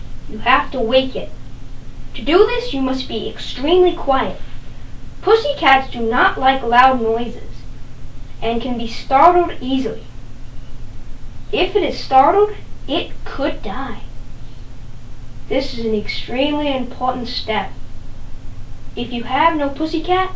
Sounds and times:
Speech: 0.3 - 1.4, 2.2 - 4.5, 5.2 - 7.7, 8.4 - 10.1, 11.5 - 14.1, 15.5 - 17.8, 19.0 - 20.3.

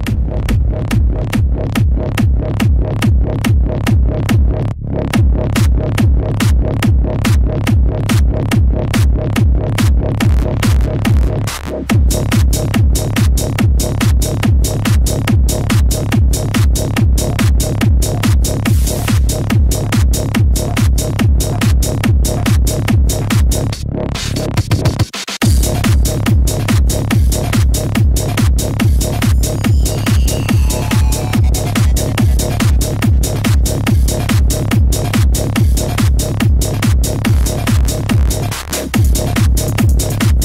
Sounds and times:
Electronic music: 0.0 - 40.4.

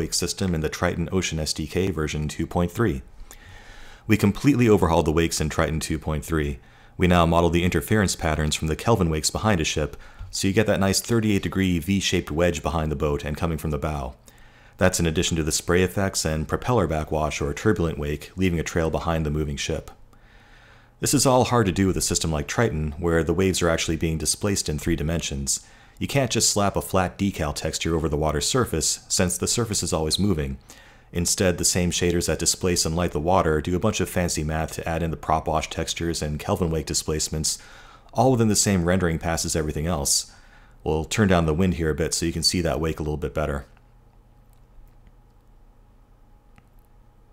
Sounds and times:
Speech: 0.0 - 3.1, 4.1 - 14.2, 14.8 - 20.0, 21.0 - 43.8.

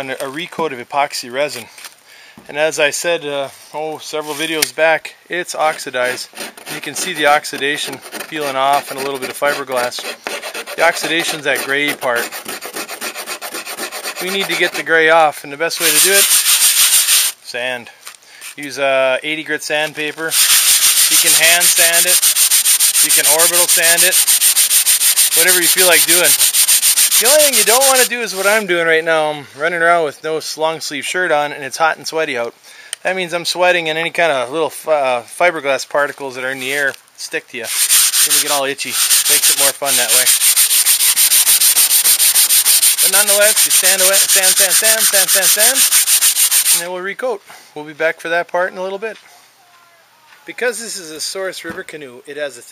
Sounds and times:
Rub: 5.7 - 15.0, 15.8 - 17.4, 20.3 - 28.6, 37.7 - 46.9
Filing (rasp): 6.0 - 15.0, 15.8 - 17.4, 20.3 - 28.5, 37.7 - 46.9.

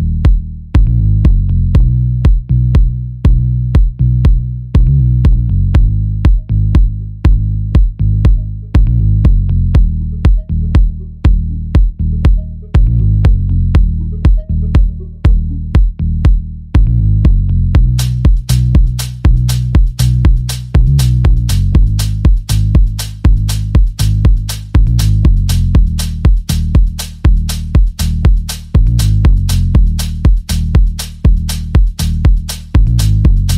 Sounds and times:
Disco: 16.8 - 33.5.

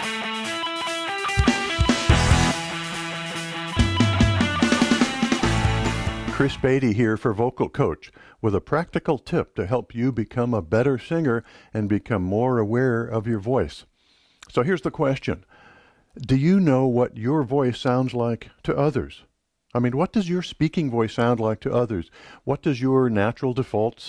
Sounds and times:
Speech: 6.3 - 13.9, 14.5 - 15.5, 16.2 - 24.0.

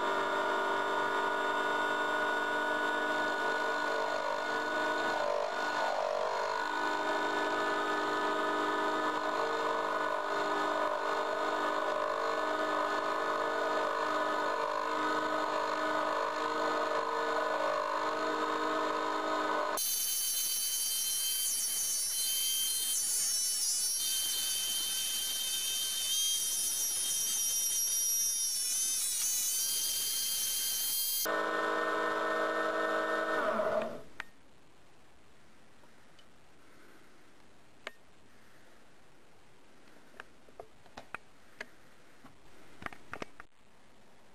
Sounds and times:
Tools: 19.8 - 31.3.

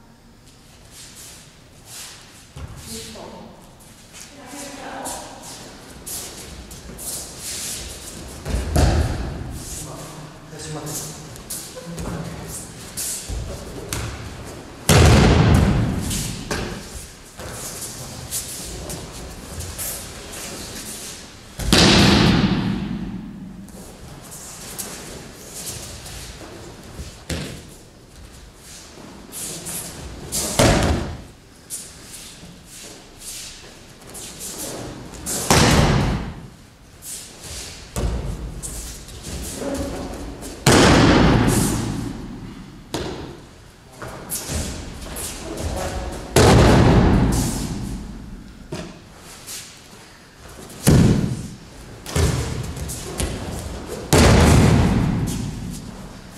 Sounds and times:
Thump, thud: 8.4 - 9.4, 14.9 - 16.8, 21.6 - 23.2, 30.6 - 31.2, 35.5 - 36.4, 40.6 - 42.0, 46.4 - 47.5, 50.8 - 51.5, 52.1 - 52.6, 54.1 - 55.6.

